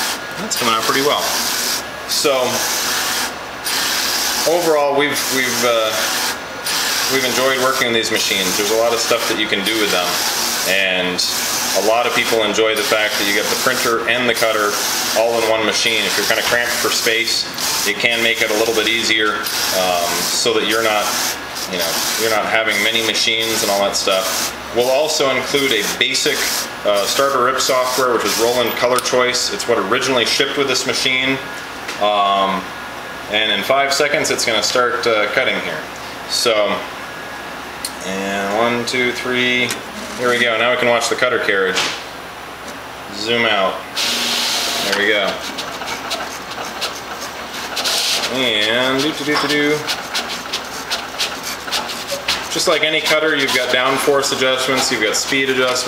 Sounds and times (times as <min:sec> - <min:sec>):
Printer: 0:00.0 - 0:29.1, 0:44.0 - 0:55.8
Speech: 0:00.4 - 0:01.4, 0:02.1 - 0:02.7, 0:04.4 - 0:06.2, 0:07.1 - 0:32.7, 0:33.3 - 0:36.9, 0:37.9 - 0:42.0, 0:43.1 - 0:43.9, 0:44.8 - 0:45.5, 0:48.3 - 0:49.9, 0:52.5 - 0:55.8.